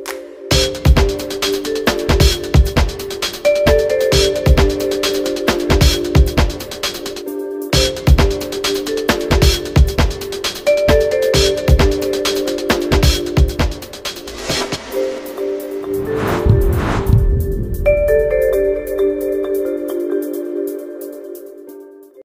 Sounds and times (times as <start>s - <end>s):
Music: 0.0s - 22.2s.